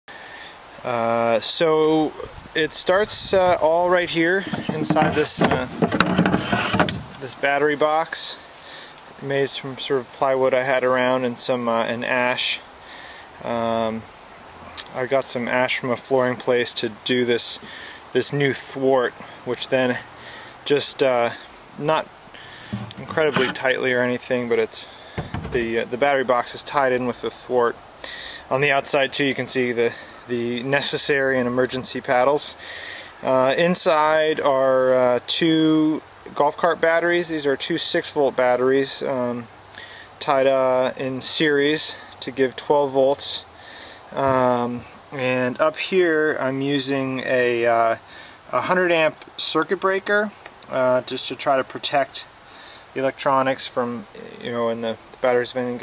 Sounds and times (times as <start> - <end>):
Speech: 0.8 - 5.8, 6.8 - 8.5, 9.2 - 12.7, 13.4 - 14.1, 14.8 - 20.0, 20.6 - 22.1, 22.8 - 27.8, 28.5 - 32.6, 33.2 - 39.5, 40.2 - 43.5, 44.1 - 55.8.